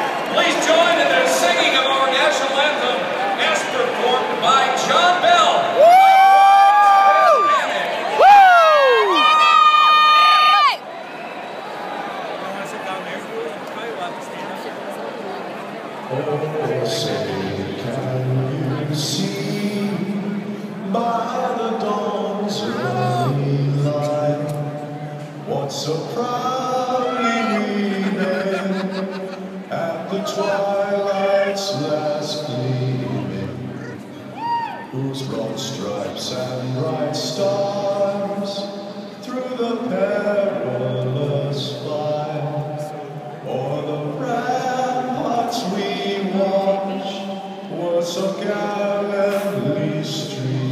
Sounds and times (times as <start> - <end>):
Speech: 0.3 - 5.7, 12.4 - 14.8
Male singing: 16.1 - 33.9, 34.8 - 50.7.